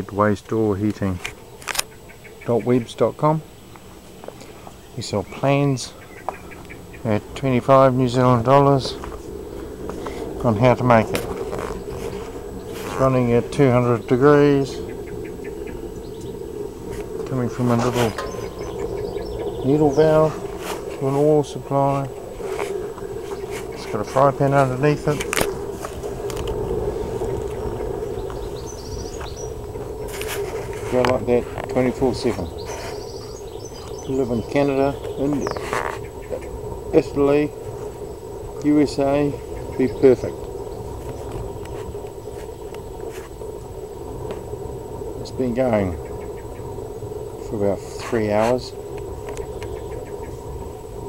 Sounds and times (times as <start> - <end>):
Speech: 0.0 - 1.3, 2.5 - 3.5, 5.0 - 6.0, 7.0 - 9.0, 10.4 - 11.2, 12.9 - 14.8, 17.3 - 18.3, 19.6 - 20.4, 21.0 - 22.2, 23.8 - 25.3, 30.9 - 32.6, 34.0 - 35.6, 36.9 - 37.6, 38.6 - 40.4, 45.2 - 46.0, 47.4 - 48.8.